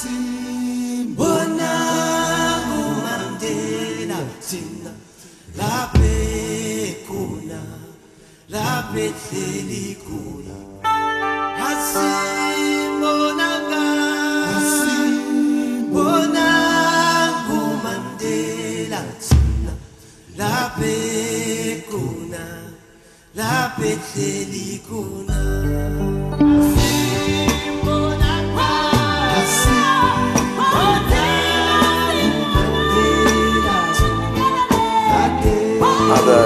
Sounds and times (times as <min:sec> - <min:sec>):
Music: 0:00.0 - 0:36.4.